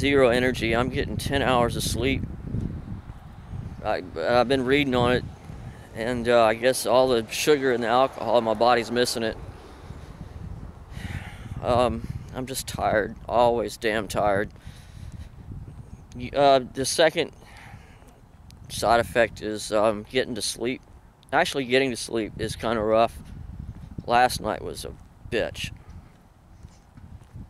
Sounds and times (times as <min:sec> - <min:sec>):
Speech: 0:00.0 - 0:02.2, 0:03.8 - 0:05.2, 0:06.0 - 0:09.4, 0:11.6 - 0:14.5, 0:16.2 - 0:17.4, 0:18.7 - 0:23.2, 0:24.1 - 0:25.7.